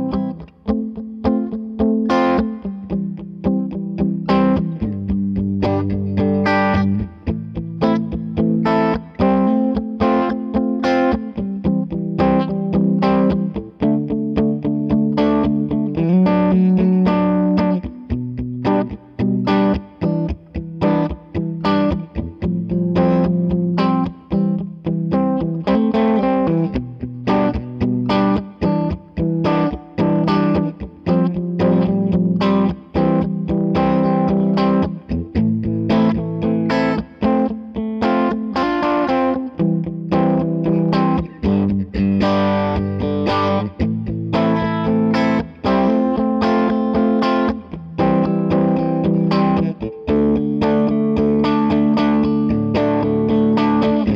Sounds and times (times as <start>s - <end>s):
Electric guitar: 0.0s - 54.1s
Strum: 0.0s - 54.1s.